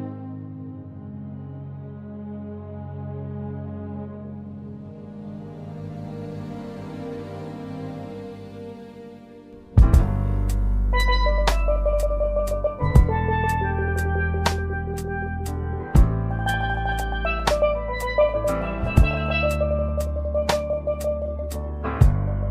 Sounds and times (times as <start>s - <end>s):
Music: 0.0s - 22.5s.